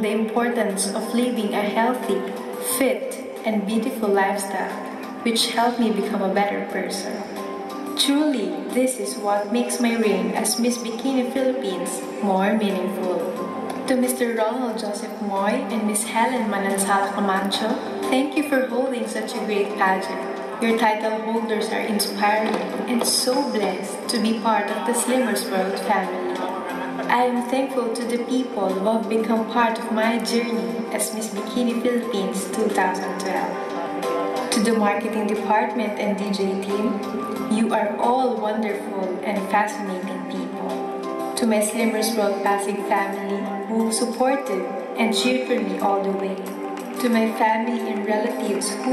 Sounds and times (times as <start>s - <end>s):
Speech: 0.0s - 7.4s, 8.0s - 33.8s, 34.4s - 40.8s, 41.4s - 48.9s
Music: 0.0s - 48.9s.